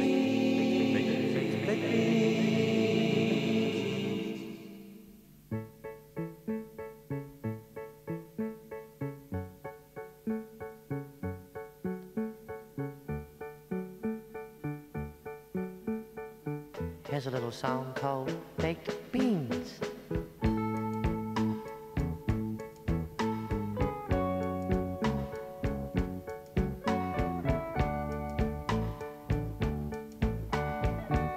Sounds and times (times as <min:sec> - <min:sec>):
Music: 0:00.0 - 0:31.3.